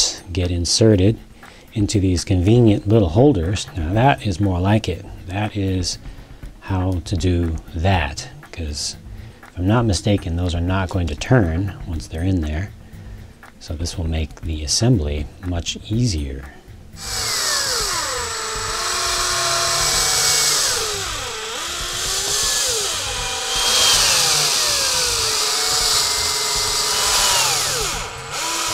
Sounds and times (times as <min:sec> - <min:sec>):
Drill: 0:17.0 - 0:28.7.